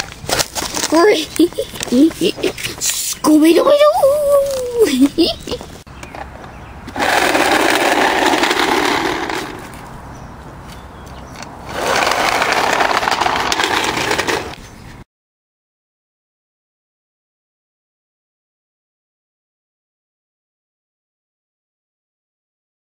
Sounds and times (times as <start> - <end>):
Outside, rural or natural: 0.0 - 15.1.